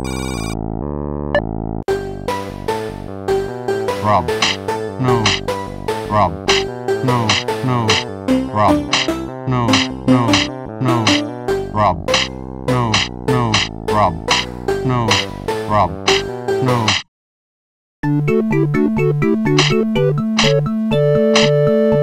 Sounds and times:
Music: 0.0 - 16.9, 18.0 - 22.0
Speech: 4.0 - 4.3, 5.0 - 5.4, 6.1 - 6.4, 7.0 - 8.9, 9.5 - 12.0, 12.7 - 14.2, 14.8 - 16.0, 16.6 - 17.0.

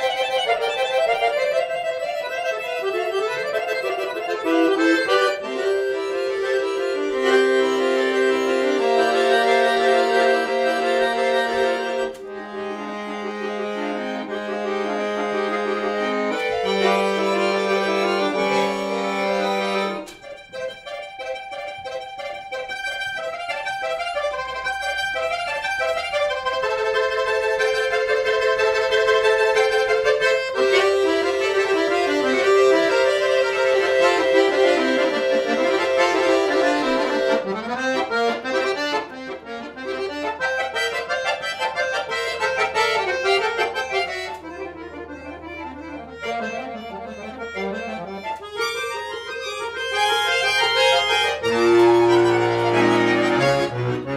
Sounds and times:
Accordion: 0.0 - 54.1.

